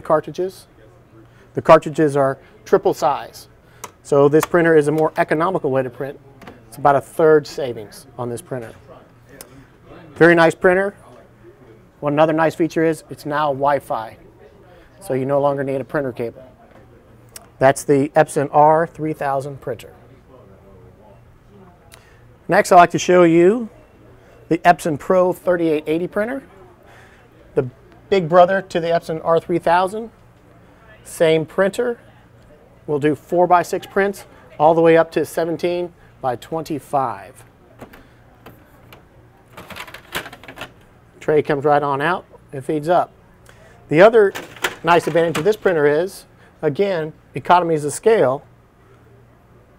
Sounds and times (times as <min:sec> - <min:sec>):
Speech: 0:00.0 - 0:37.8, 0:41.2 - 0:48.5.